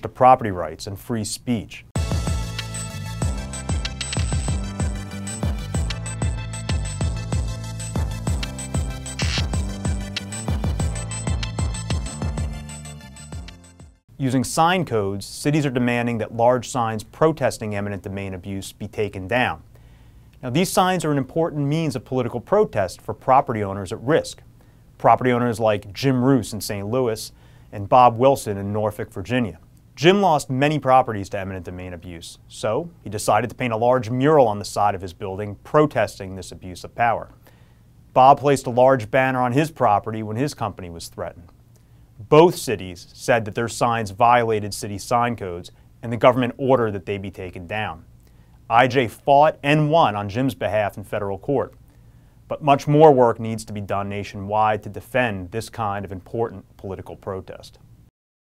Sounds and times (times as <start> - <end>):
Male speech, man speaking: 0.0 - 1.9, 14.2 - 19.6, 20.4 - 24.4, 25.0 - 37.3, 38.2 - 41.5, 42.2 - 48.1, 48.7 - 51.8, 52.5 - 57.8.